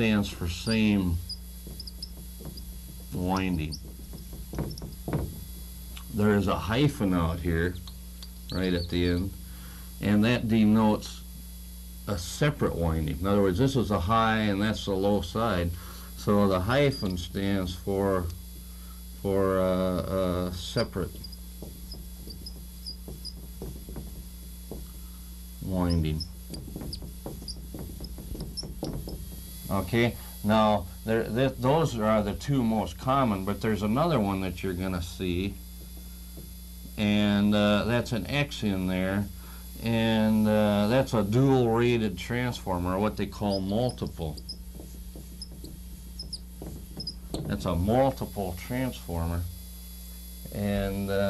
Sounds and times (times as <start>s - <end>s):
Speech: 0.0s - 1.2s, 3.2s - 3.8s, 6.1s - 7.8s, 8.6s - 9.4s, 10.0s - 11.2s, 12.1s - 18.4s, 19.2s - 21.2s, 25.6s - 26.2s, 29.7s - 35.6s, 37.0s - 44.4s, 47.5s - 49.5s, 50.5s - 51.3s.